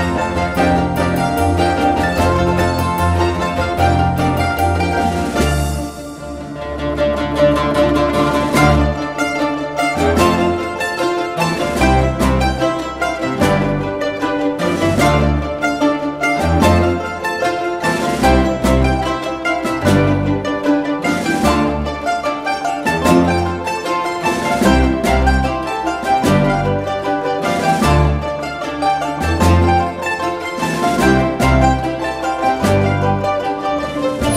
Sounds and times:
Classical music: 0.0 - 34.3
Mandolin: 0.0 - 34.3
Orchestra: 0.0 - 34.3.

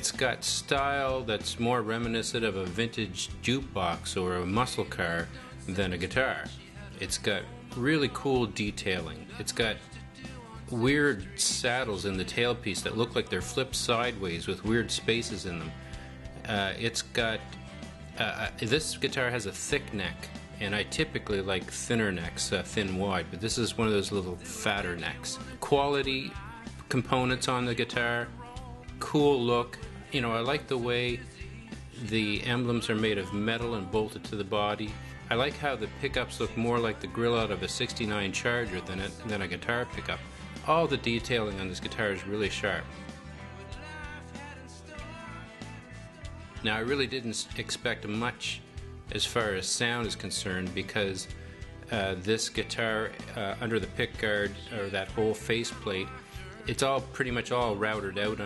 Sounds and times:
Speech: 0.0 - 9.8, 10.6 - 15.8, 16.4 - 17.6, 18.2 - 28.4, 29.0 - 31.3, 31.9 - 43.0, 46.6 - 58.4.

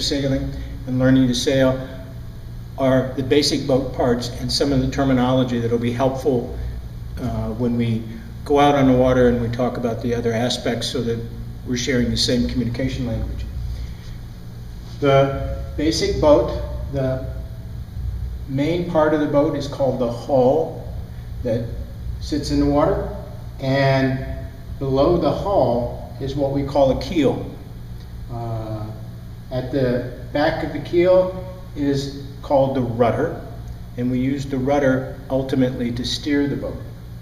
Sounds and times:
Speech: 0.0 - 2.1, 2.8 - 6.6, 7.2 - 13.6, 15.0 - 17.5, 18.5 - 27.6, 28.3 - 37.0.

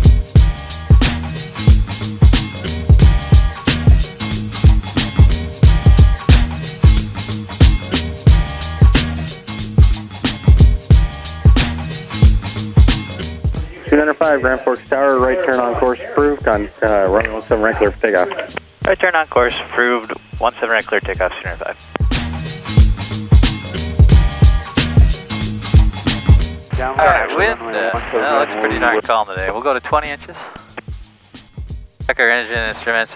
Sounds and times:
Music: 0.0 - 33.1
Speech: 13.6 - 21.8, 26.8 - 30.6, 32.1 - 33.1.

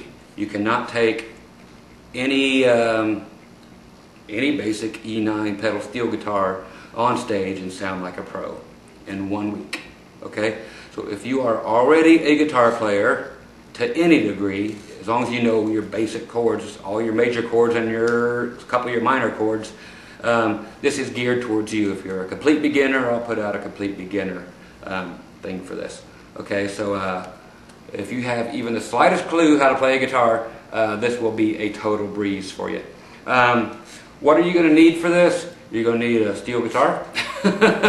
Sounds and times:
Speech: 0.0 - 1.4, 2.1 - 3.4, 4.3 - 37.1.

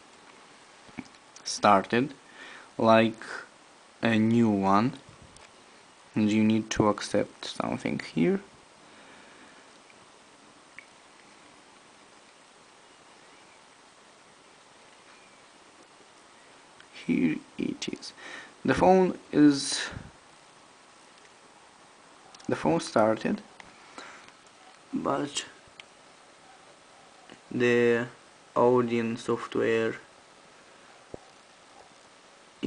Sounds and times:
Inside, small room: 0.0 - 32.6
Speech: 1.4 - 2.2, 2.8 - 5.0, 6.2 - 8.5, 16.9 - 20.1, 22.4 - 23.5, 24.9 - 25.6, 27.4 - 30.1.

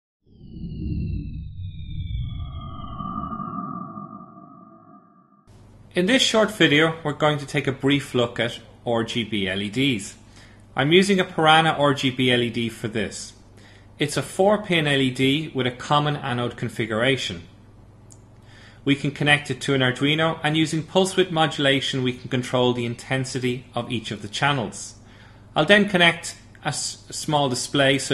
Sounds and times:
Speech: 5.9 - 10.2, 10.8 - 13.4, 14.0 - 17.6, 18.8 - 25.0, 25.6 - 28.1.

